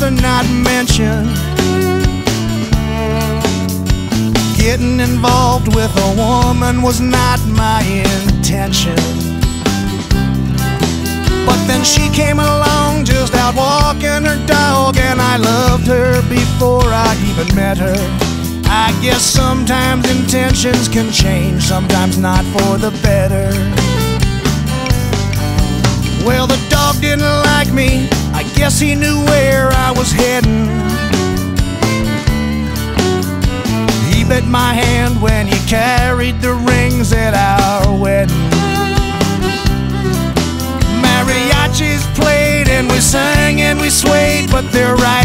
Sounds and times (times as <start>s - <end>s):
Music: 0.0s - 45.2s.